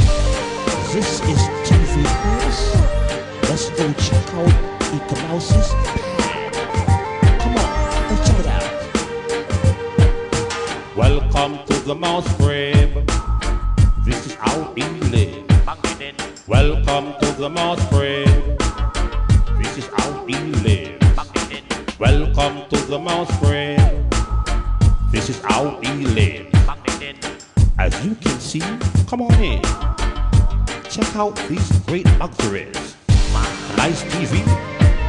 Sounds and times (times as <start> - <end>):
Music: 0.0 - 35.0.